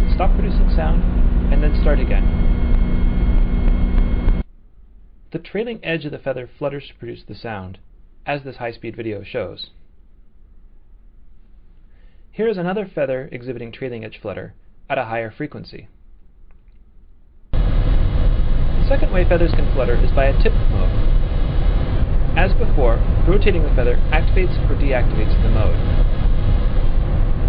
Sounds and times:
Speech: 0.0 - 2.3, 5.3 - 9.8, 12.4 - 15.9, 18.8 - 21.0, 22.4 - 25.8.

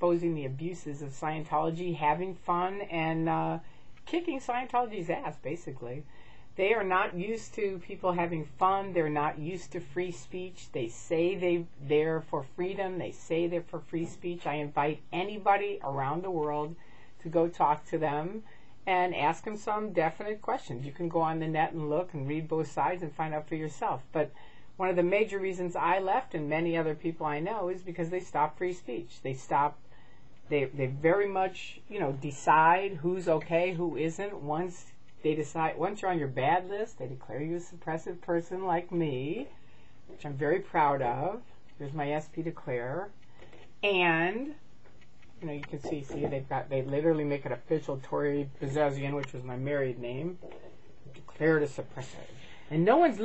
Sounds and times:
Female speech, woman speaking: 0.0 - 29.8, 30.5 - 39.5, 40.1 - 43.2, 43.8 - 44.6, 45.4 - 53.2.

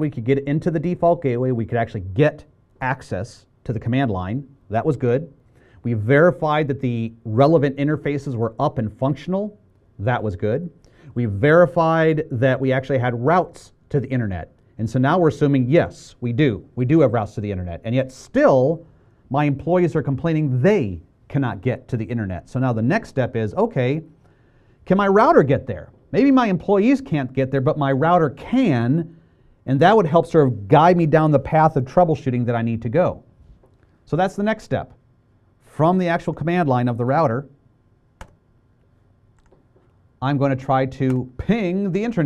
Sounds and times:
Speech: 0.0 - 24.1, 24.9 - 33.3, 34.1 - 35.0, 35.7 - 37.6, 40.2 - 42.2.

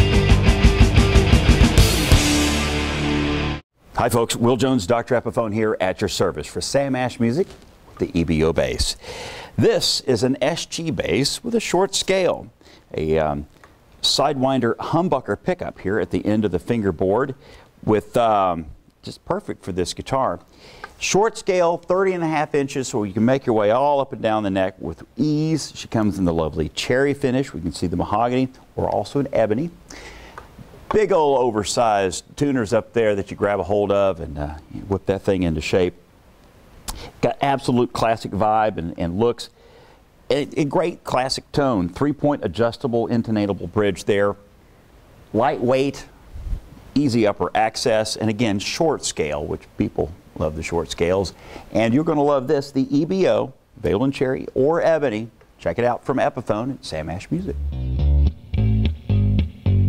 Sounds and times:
Speech: 4.0 - 9.0, 9.6 - 29.8, 30.9 - 36.0, 37.2 - 39.6, 40.3 - 44.5, 45.3 - 46.1, 47.0 - 57.6.

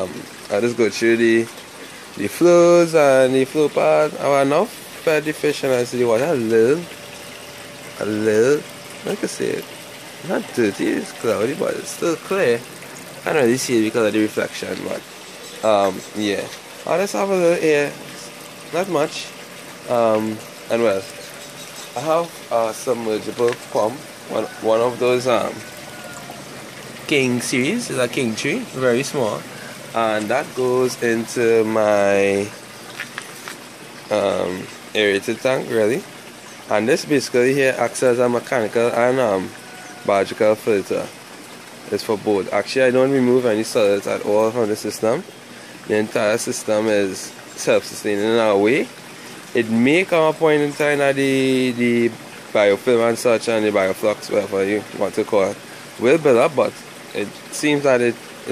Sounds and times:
Speech: 0.0 - 1.5, 2.2 - 7.0, 8.0 - 21.2, 22.0 - 25.7, 27.1 - 32.6, 34.1 - 36.1, 36.7 - 41.1, 41.9 - 45.3, 45.9 - 58.5.

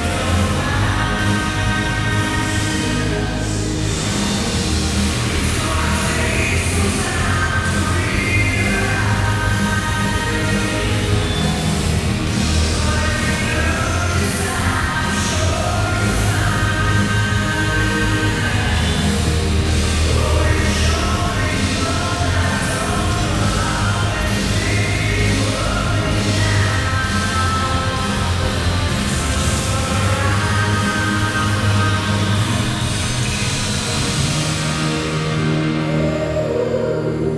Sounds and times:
Music: 0.0 - 37.3.

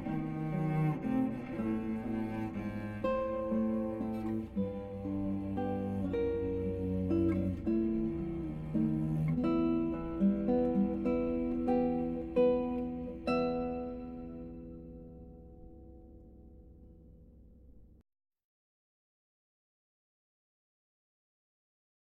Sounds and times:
Cello: 0.0 - 18.0.

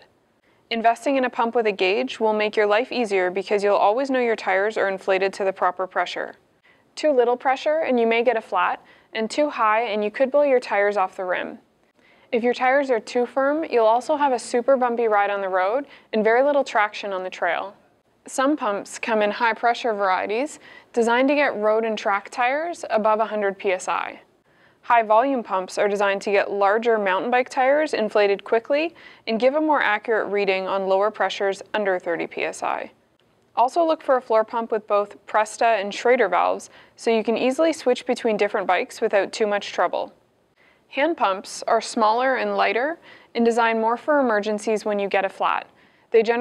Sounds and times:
Speech: 0.7 - 6.4, 7.0 - 11.6, 12.3 - 33.0, 33.6 - 40.2, 40.9 - 46.4.

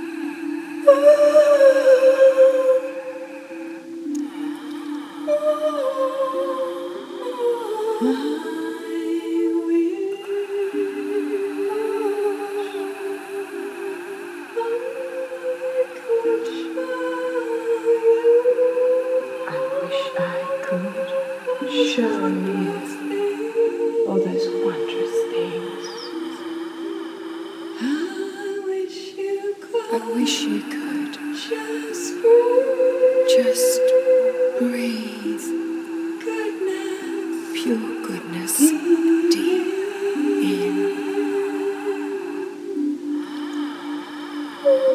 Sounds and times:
Music: 0.0 - 44.9
Speech: 19.5 - 20.9, 21.6 - 22.9, 24.1 - 25.9.

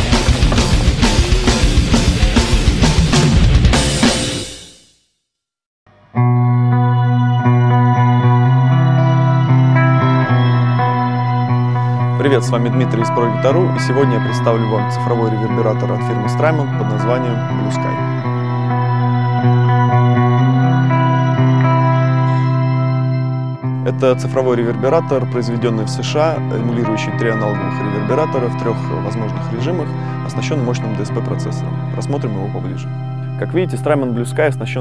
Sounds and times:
Distortion: 0.0 - 4.7, 5.9 - 34.8
Music: 0.0 - 5.1, 5.9 - 34.8
Speech: 12.2 - 18.0, 23.8 - 34.8.

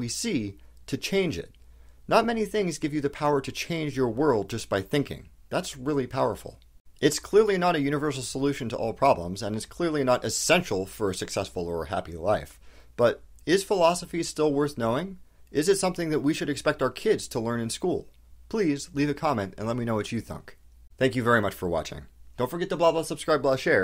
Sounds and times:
Narration, monologue: 0.0 - 23.8.

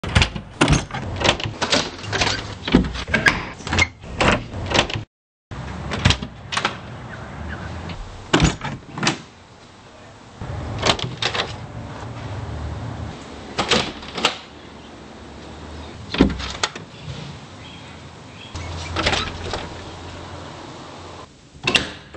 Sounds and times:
Door: 0.0 - 5.0, 7.9 - 9.2, 18.9 - 19.8, 21.6 - 22.1.

